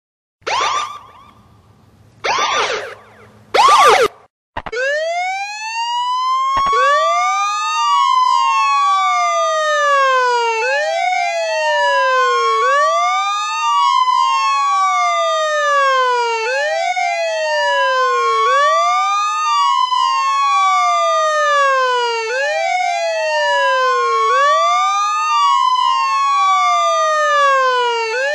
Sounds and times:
Siren: 0.4 - 28.3.

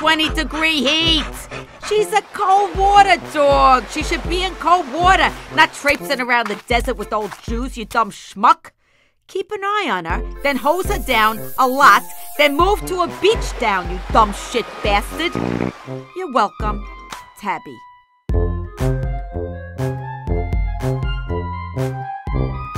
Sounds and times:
Music: 0.0 - 8.2, 10.0 - 22.7
Speech: 0.0 - 8.7, 9.3 - 15.4, 16.2 - 17.9.

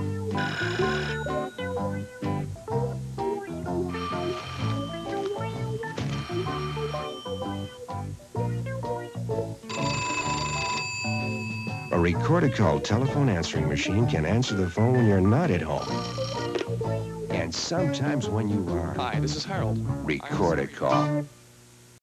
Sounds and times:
Music: 0.0 - 21.9
Speech: 11.9 - 15.9, 17.3 - 21.2.

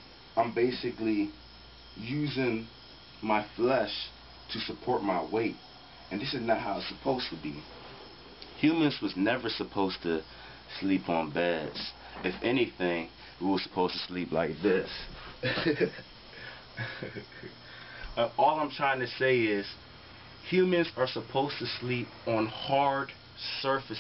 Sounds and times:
Inside, small room: 0.0 - 24.0
Speech: 0.4 - 1.4, 2.0 - 7.7, 8.6 - 15.1, 18.2 - 19.8, 20.4 - 24.0.

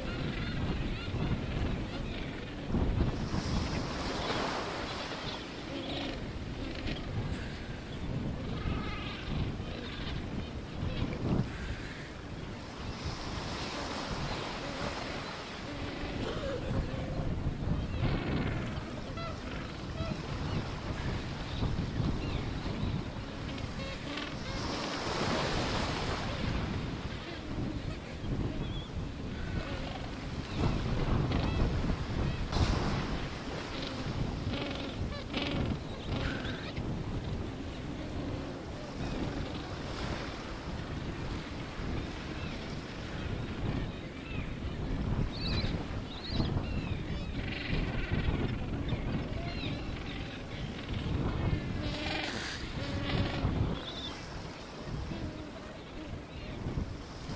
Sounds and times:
Outside, rural or natural: 0.0 - 57.3.

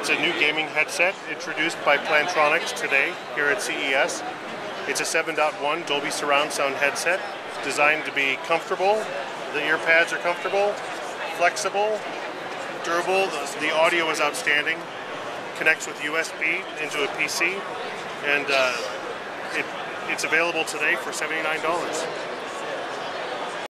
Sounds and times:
Speech: 0.0 - 4.2, 4.9 - 12.0, 12.8 - 14.8, 15.6 - 17.6, 18.2 - 22.2.

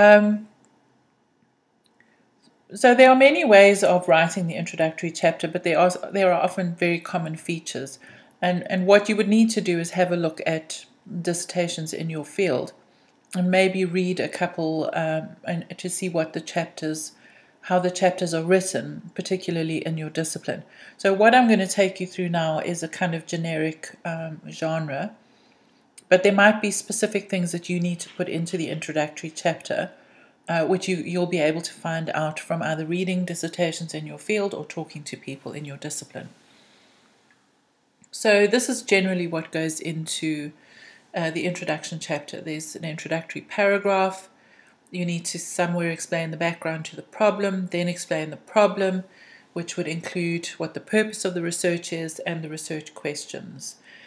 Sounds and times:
Speech: 0.0 - 0.5, 2.7 - 12.8, 13.4 - 25.2, 26.0 - 29.9, 30.5 - 36.3, 38.2 - 40.6, 41.2 - 44.3, 44.9 - 53.8.

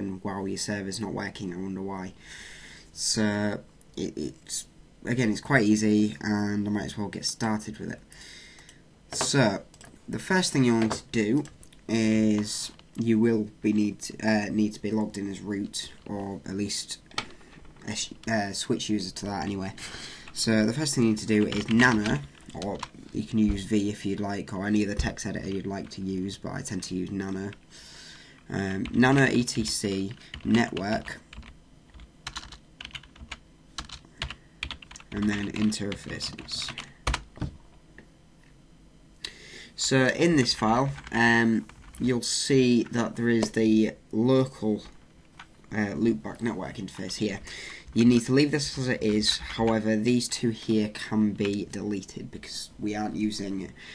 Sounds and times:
Speech: 0.0 - 2.2, 3.0 - 8.0, 9.1 - 17.1, 17.8 - 19.8, 20.4 - 27.6, 28.5 - 31.3, 35.1 - 36.8, 39.8 - 45.0, 45.7 - 53.8.

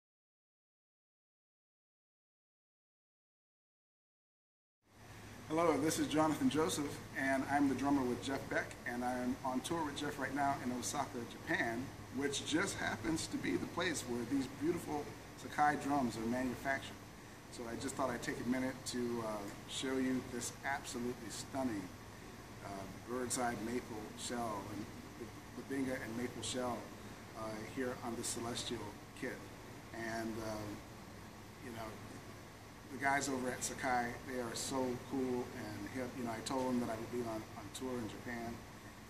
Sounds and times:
Speech: 5.5 - 22.0, 22.6 - 30.8, 31.6 - 32.2, 32.9 - 38.6.

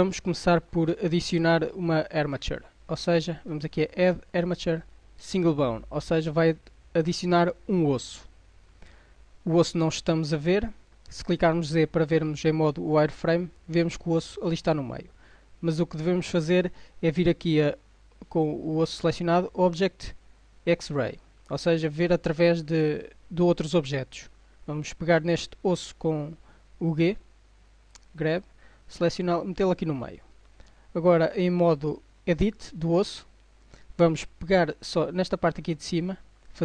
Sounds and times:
Speech: 0.0 - 8.3, 9.4 - 27.3, 28.0 - 30.3, 31.0 - 33.3, 34.0 - 36.6.

